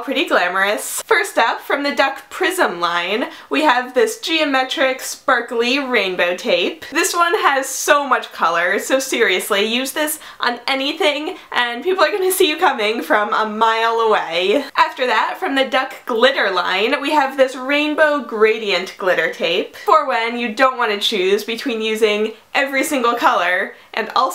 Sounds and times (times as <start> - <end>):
Speech: 0.0 - 24.3.